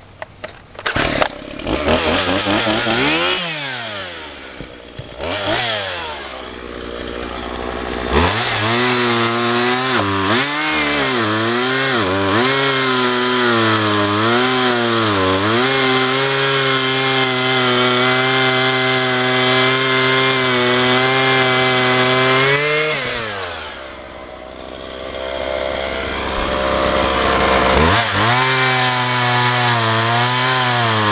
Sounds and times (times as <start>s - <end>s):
Power tool: 0.8s - 31.1s.